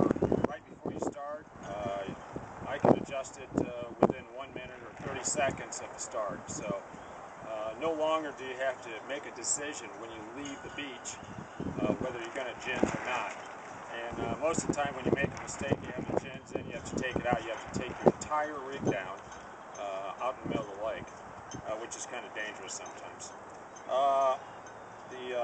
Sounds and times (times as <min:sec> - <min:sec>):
Speech: 0:00.0 - 0:06.8, 0:07.5 - 0:11.2, 0:11.8 - 0:19.2, 0:19.8 - 0:21.0, 0:21.6 - 0:23.3, 0:23.9 - 0:24.4, 0:25.1 - 0:25.4.